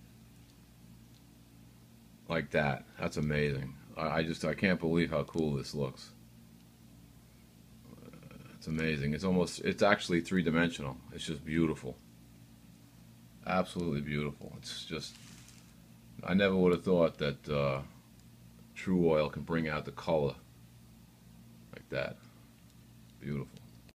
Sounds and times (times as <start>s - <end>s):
Speech: 2.3s - 6.2s, 7.9s - 12.0s, 13.4s - 15.2s, 16.2s - 18.0s, 18.8s - 20.4s, 21.7s - 22.2s, 23.2s - 23.6s.